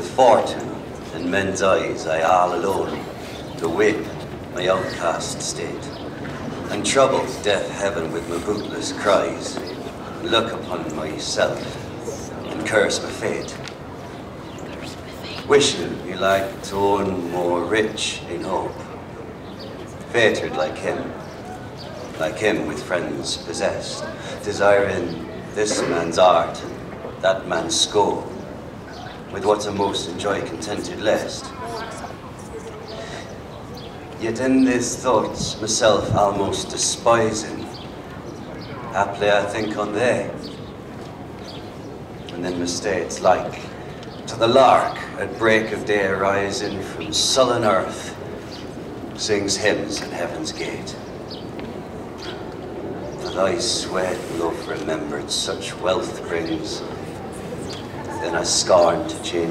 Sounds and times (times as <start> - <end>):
Speech: 0.0 - 6.0, 6.6 - 13.7, 14.7 - 18.9, 20.1 - 28.4, 29.1 - 33.3, 34.2 - 37.8, 38.7 - 40.5, 42.3 - 48.2, 49.2 - 51.0, 53.2 - 57.2, 57.9 - 59.5.